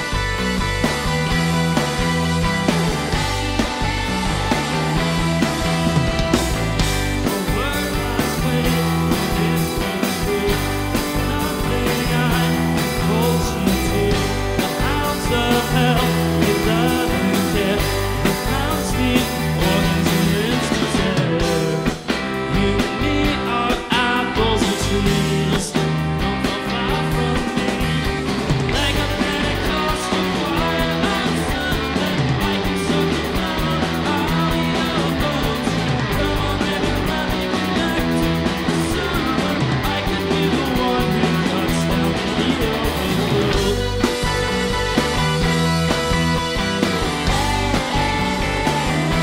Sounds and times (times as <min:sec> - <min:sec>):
Music: 0:00.0 - 0:49.2.